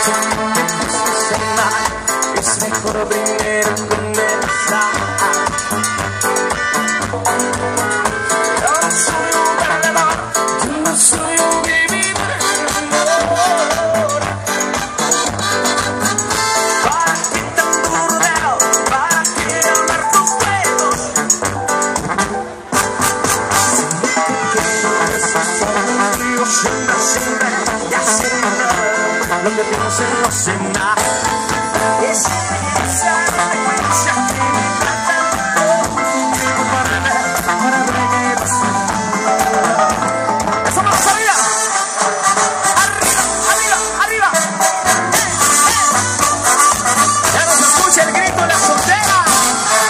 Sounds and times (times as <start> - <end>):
Music: 0.0 - 49.8.